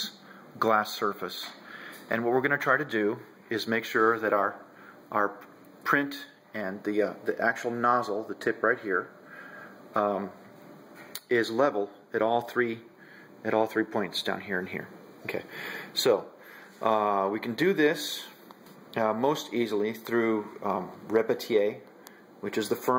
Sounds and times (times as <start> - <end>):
Speech: 0.0 - 9.2, 10.0 - 10.4, 11.2 - 18.4, 19.0 - 22.9.